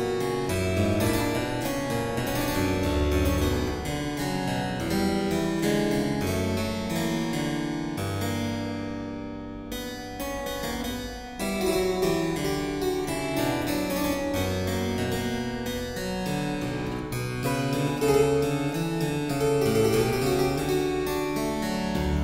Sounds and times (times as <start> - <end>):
Harpsichord: 0.0 - 22.2.